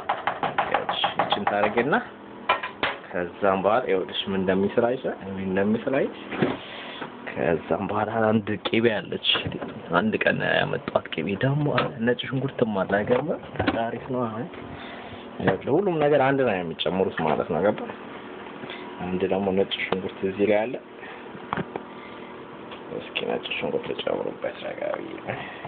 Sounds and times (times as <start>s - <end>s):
Speech: 0.7s - 2.1s, 3.1s - 6.2s, 7.3s - 14.6s, 15.4s - 18.0s, 19.0s - 20.8s, 22.9s - 25.3s.